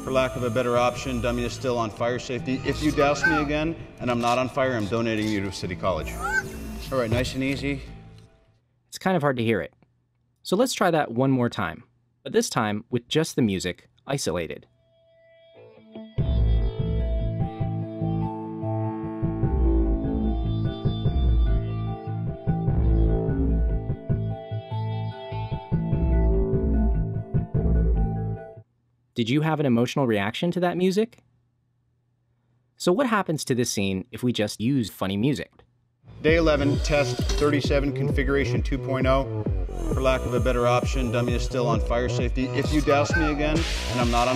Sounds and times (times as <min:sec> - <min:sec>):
Speech: 0:00.0 - 0:06.2, 0:06.9 - 0:07.8, 0:08.9 - 0:09.8, 0:10.4 - 0:14.7, 0:29.2 - 0:31.2, 0:32.8 - 0:35.6, 0:36.2 - 0:44.3
Music: 0:00.0 - 0:08.6, 0:14.8 - 0:28.6, 0:36.1 - 0:44.3.